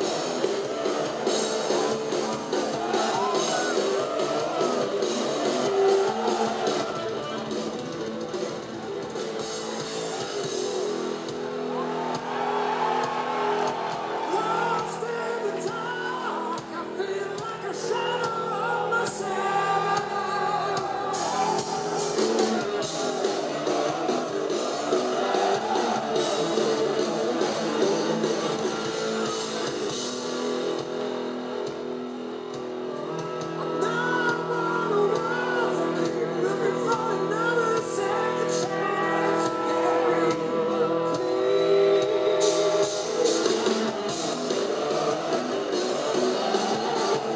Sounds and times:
Music: 0:00.0 - 0:47.3.

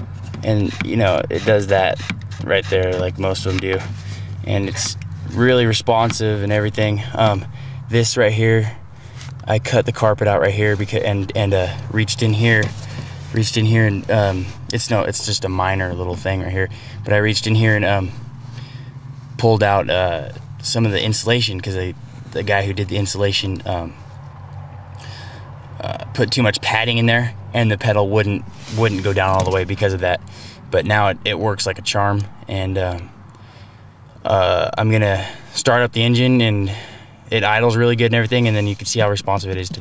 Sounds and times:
Speech: 0:00.4 - 0:03.9, 0:04.5 - 0:08.8, 0:09.5 - 0:12.7, 0:13.3 - 0:18.2, 0:19.4 - 0:24.0, 0:25.8 - 0:33.1, 0:34.2 - 0:39.8.

